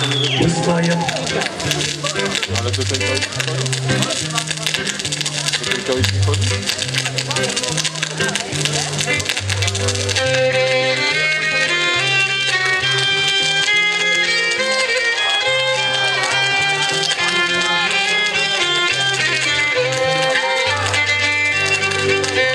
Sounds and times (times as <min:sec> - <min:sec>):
Speech: 0:00.0 - 0:10.1
Folk music: 0:00.0 - 0:22.5.